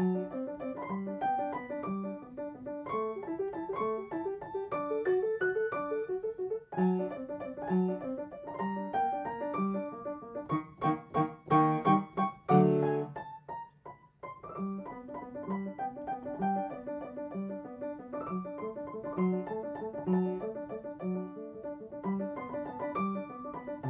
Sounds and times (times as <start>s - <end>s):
Piano: 0.0s - 23.8s.